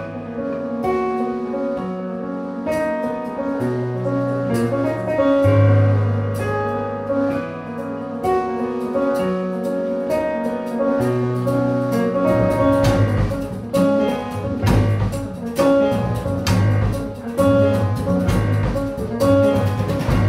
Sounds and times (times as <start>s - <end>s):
Jazz: 0.0s - 20.2s
Drum: 11.1s - 20.2s.